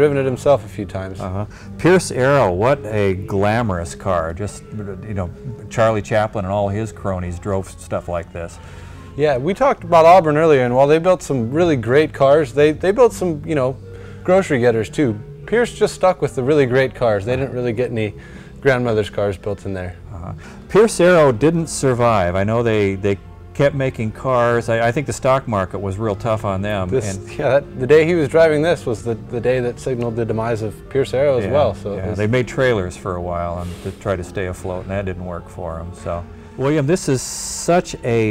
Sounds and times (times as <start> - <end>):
Speech: 0.0 - 8.6, 9.2 - 38.3.